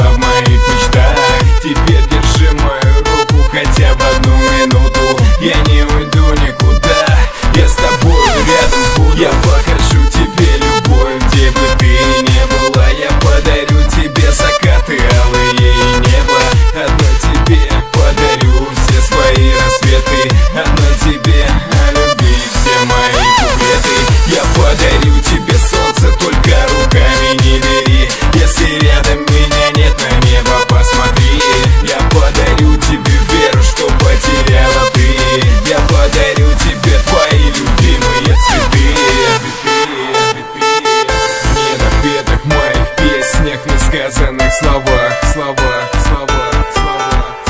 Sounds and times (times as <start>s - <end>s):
Music: 0.0s - 47.5s.